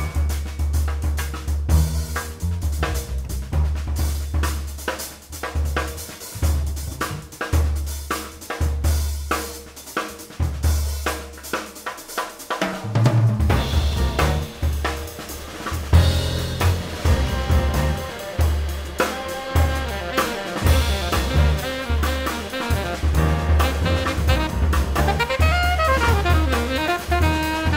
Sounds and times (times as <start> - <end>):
Drum kit: 0.0 - 27.7.